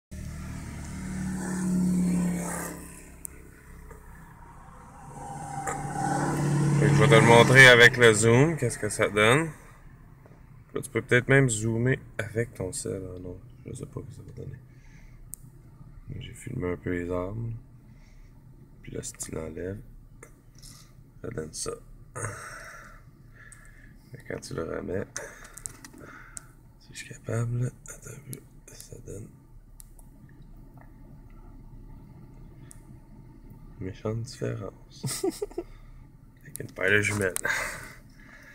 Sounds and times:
Outside, urban or manmade: 0.0 - 38.5
Speech: 6.8 - 9.6, 10.8 - 14.6, 16.1 - 17.6, 18.8 - 19.9, 21.2 - 21.8, 24.1 - 25.2, 26.8 - 29.3, 33.8 - 35.1, 36.5 - 37.5.

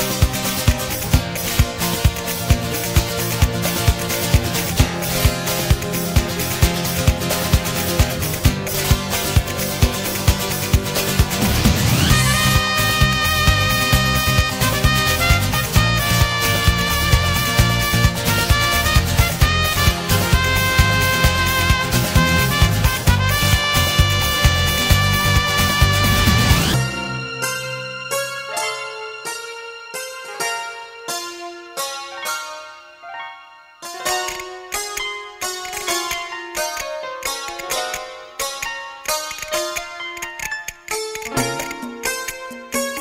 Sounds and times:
Music: 0.0 - 43.0.

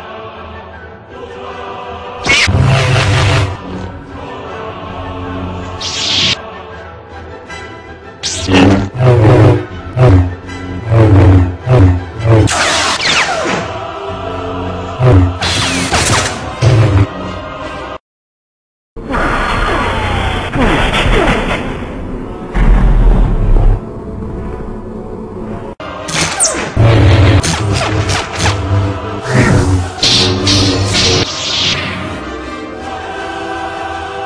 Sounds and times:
Music: 0.0 - 18.0, 19.0 - 34.2.

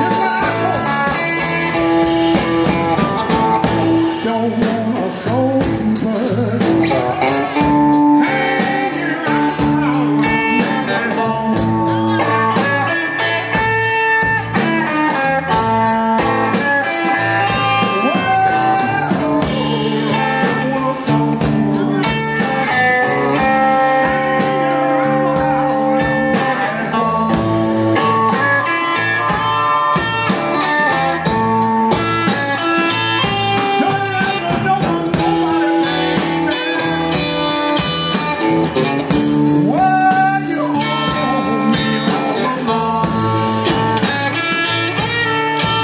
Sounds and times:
Singing: 0.0 - 1.8, 3.6 - 13.2, 17.1 - 27.4, 39.6 - 43.1
Blues: 0.0 - 45.8.

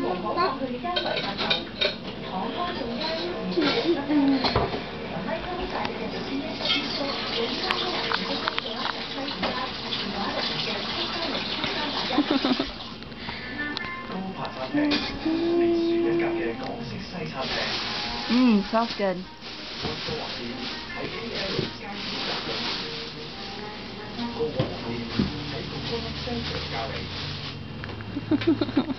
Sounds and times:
Music: 13.4 - 27.6.

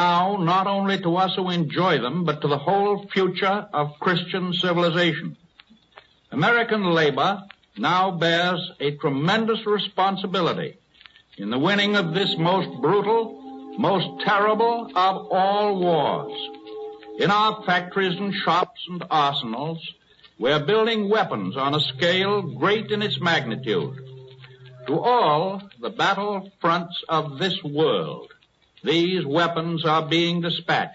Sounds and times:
Male speech, man speaking: 0.0 - 5.4, 6.4 - 10.8, 11.4 - 16.5, 17.2 - 24.0, 24.8 - 28.3, 28.9 - 30.9
Narration, monologue: 0.0 - 30.9.

